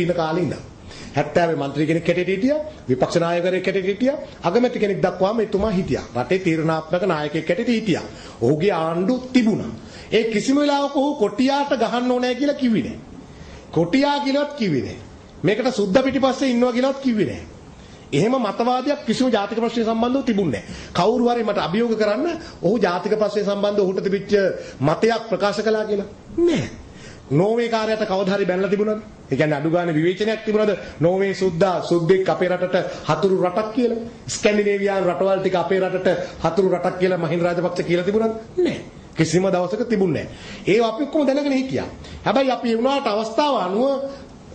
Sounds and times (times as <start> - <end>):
Male speech, man speaking: 0.0 - 13.0, 13.8 - 17.5, 18.2 - 26.7, 27.3 - 44.3
Narration, monologue: 0.0 - 44.5.